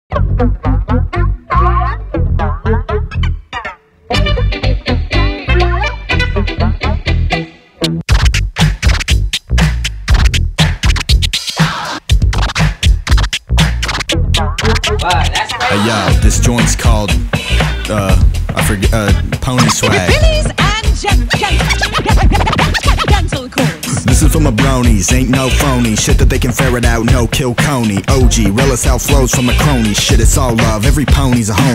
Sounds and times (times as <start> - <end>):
Music: 0.1 - 31.7.